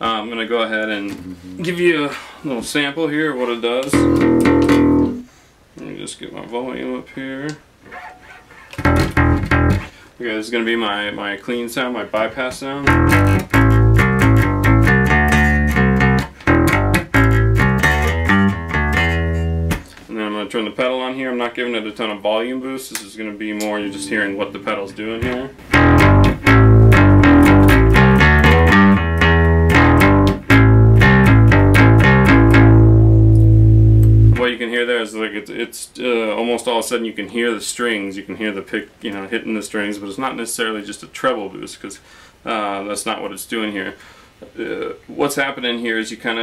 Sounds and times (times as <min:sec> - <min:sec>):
Speech: 0:00.0 - 0:04.1, 0:05.8 - 0:07.6, 0:10.2 - 0:12.9, 0:20.1 - 0:25.6, 0:34.4 - 0:46.4
Inside, small room: 0:00.0 - 0:46.4
Bass guitar: 0:03.9 - 0:05.3, 0:08.8 - 0:09.9, 0:12.8 - 0:20.0, 0:23.8 - 0:34.4
Electronic tuner: 0:03.9 - 0:05.3, 0:08.7 - 0:09.9, 0:12.8 - 0:20.0, 0:23.7 - 0:34.4.